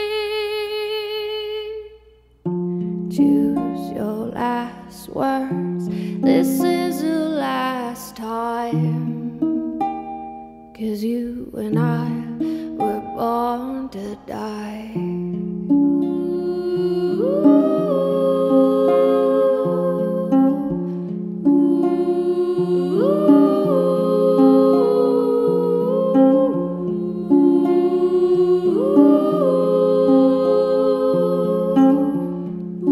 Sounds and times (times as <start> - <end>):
Humming: 15.3 - 32.9.